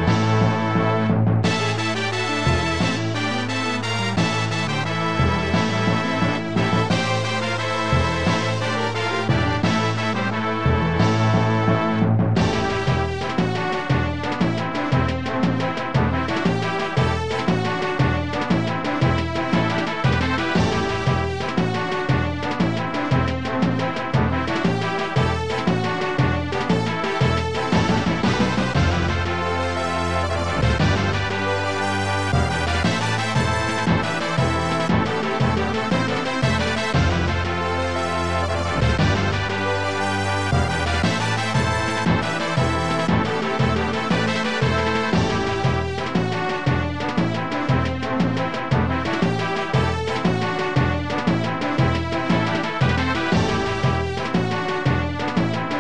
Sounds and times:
Background music: 0.0s - 55.8s
Rhythm and blues: 0.0s - 55.8s
Video game music: 0.0s - 55.8s
New-age music: 1.5s - 14.2s, 24.9s - 49.8s.

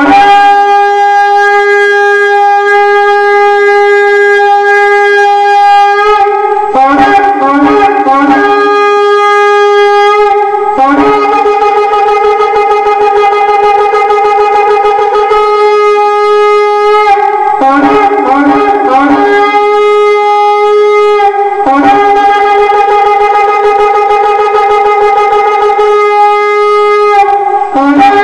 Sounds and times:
Shofar: 0.0s - 28.2s
Wind instrument, woodwind instrument: 0.0s - 28.2s.

